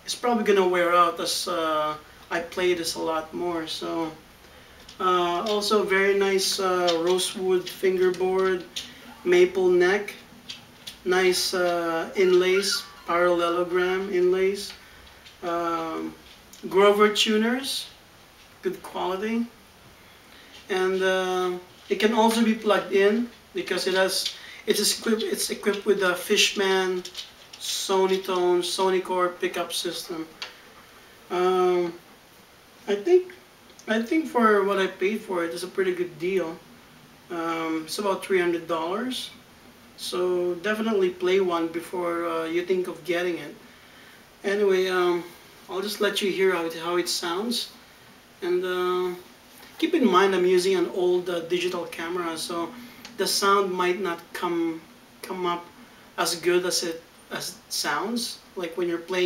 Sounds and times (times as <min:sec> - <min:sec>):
Speech: 0:00.0 - 0:04.3, 0:05.0 - 0:10.3, 0:11.0 - 0:14.8, 0:15.4 - 0:18.0, 0:18.6 - 0:19.6, 0:20.7 - 0:30.4, 0:31.3 - 0:32.1, 0:32.8 - 0:36.7, 0:37.3 - 0:39.4, 0:40.0 - 0:43.6, 0:44.4 - 0:47.8, 0:48.4 - 0:59.2.